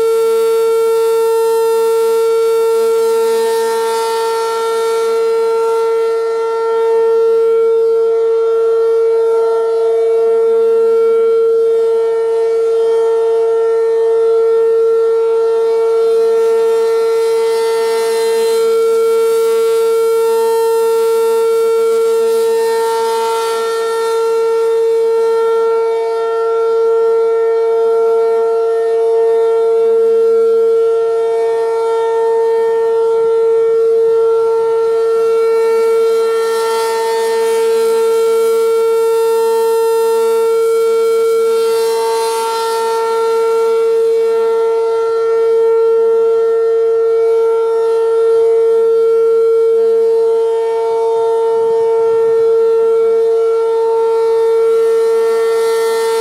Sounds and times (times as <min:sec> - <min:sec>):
Civil defense siren: 0:00.0 - 0:56.2.